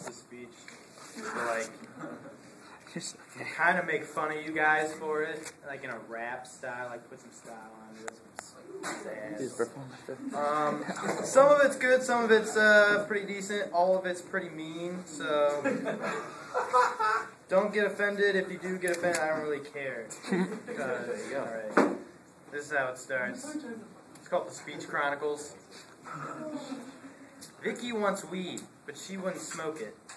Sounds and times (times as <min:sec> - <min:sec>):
Male speech, man speaking: 0:00.0 - 0:00.6, 0:01.2 - 0:01.8, 0:02.9 - 0:15.8, 0:17.5 - 0:20.1, 0:20.7 - 0:21.9, 0:22.5 - 0:23.6, 0:24.2 - 0:25.7, 0:27.6 - 0:30.0
Narration, monologue: 0:00.0 - 0:26.2, 0:27.0 - 0:30.1.